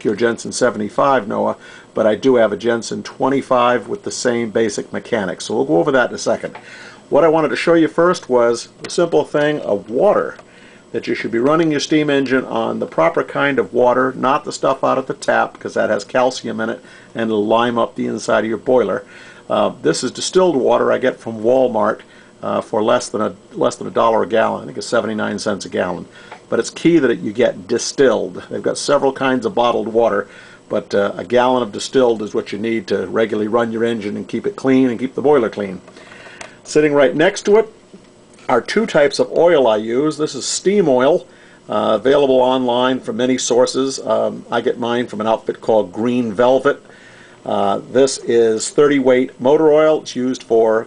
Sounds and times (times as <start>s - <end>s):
Speech: 0.0s - 35.8s, 36.6s - 37.8s, 38.4s - 46.8s, 47.4s - 50.8s.